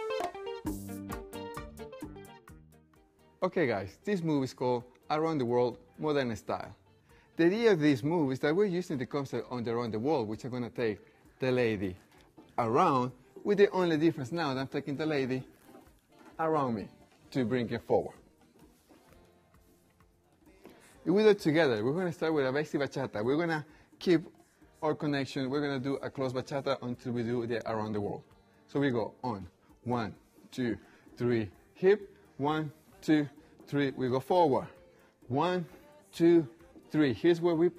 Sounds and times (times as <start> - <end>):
Speech: 3.4 - 6.8, 7.4 - 12.0, 12.6 - 15.5, 16.4 - 18.2, 21.0 - 37.7.